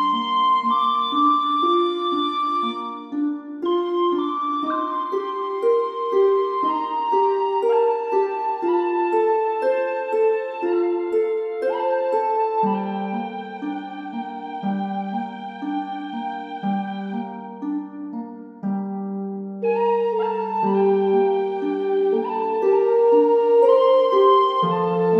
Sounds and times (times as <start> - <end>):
Piano: 0.0 - 25.1.